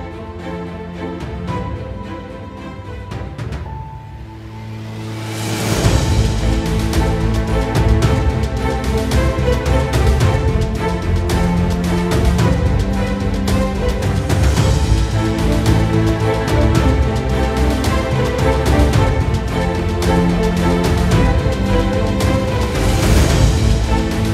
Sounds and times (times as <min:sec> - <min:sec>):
Music: 0:00.0 - 0:24.3.